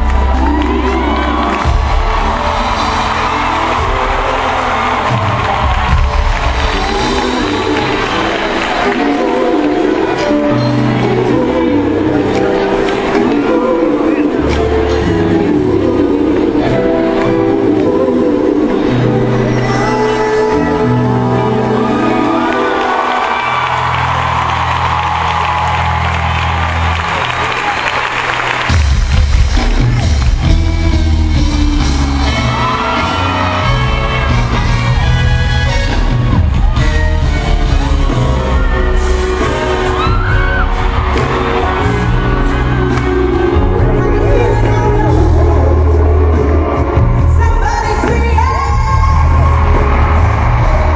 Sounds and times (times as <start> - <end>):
Music: 0.0 - 50.9
Female singing: 7.2 - 22.6, 42.8 - 50.0.